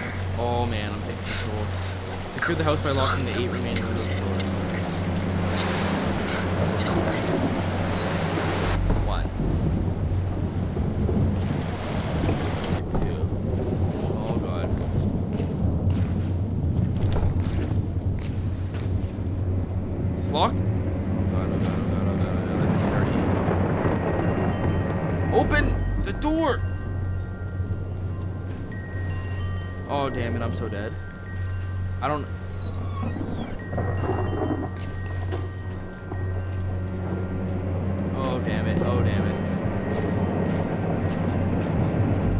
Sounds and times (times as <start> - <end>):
Speech: 0.4 - 1.7, 2.4 - 4.4, 9.0 - 9.3, 14.2 - 14.7, 21.3 - 23.2, 29.9 - 31.0, 38.2 - 39.4.